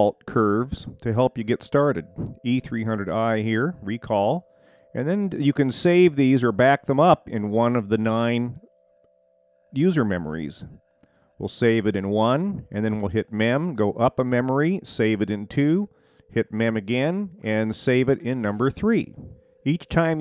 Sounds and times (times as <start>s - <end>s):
Speech: 0.0s - 4.4s, 5.0s - 8.6s, 9.8s - 10.8s, 11.4s - 20.2s.